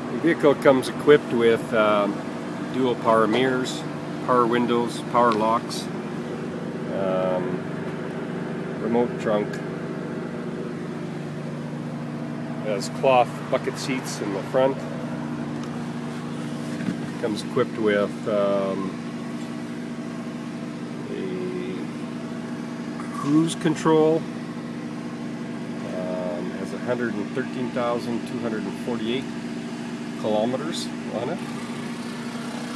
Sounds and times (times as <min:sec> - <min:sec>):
Speech: 0:00.1 - 0:06.0, 0:06.9 - 0:07.6, 0:08.8 - 0:09.6, 0:12.6 - 0:14.8, 0:17.2 - 0:19.0, 0:21.0 - 0:21.9, 0:23.0 - 0:24.3, 0:25.8 - 0:29.3, 0:30.2 - 0:31.5.